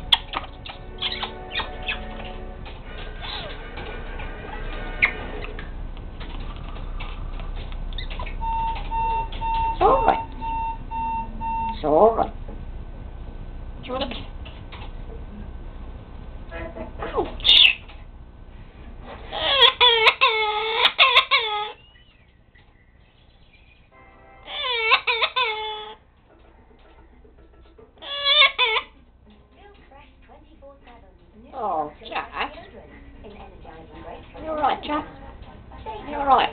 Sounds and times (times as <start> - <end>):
Domestic animals, pets: 0.0 - 11.8, 16.6 - 18.0, 19.2 - 26.0, 27.7 - 29.0.